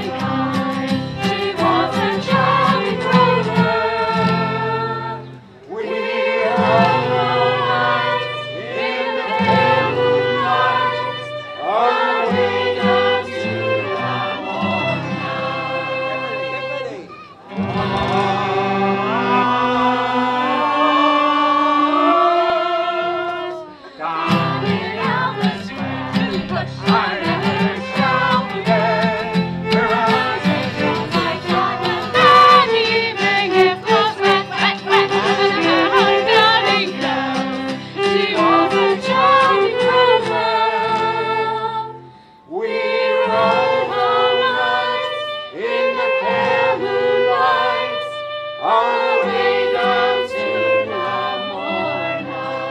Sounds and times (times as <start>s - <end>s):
Music: 0.0s - 52.7s
Female singing: 1.2s - 5.2s, 23.1s - 29.2s, 29.8s - 42.0s
Speech: 16.0s - 17.3s.